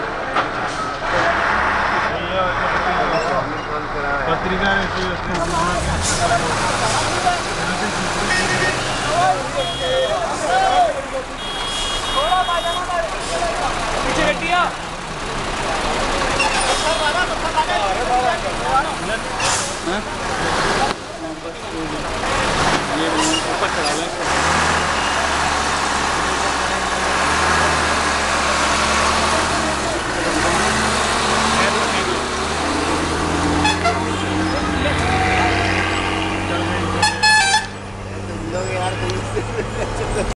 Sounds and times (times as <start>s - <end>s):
Truck: 0.0s - 40.3s
Speech: 2.1s - 11.4s, 12.1s - 24.6s, 31.5s - 32.3s, 38.2s - 39.4s.